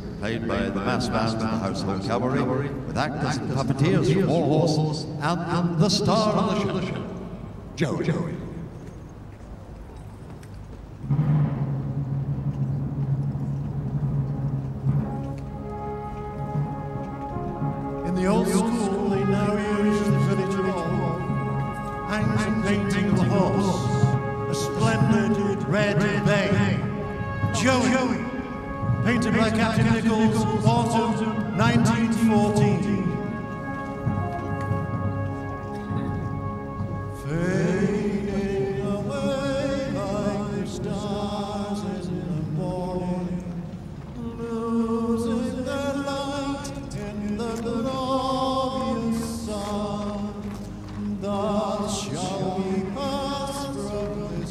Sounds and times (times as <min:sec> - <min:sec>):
Music: 0:00.0 - 0:54.5.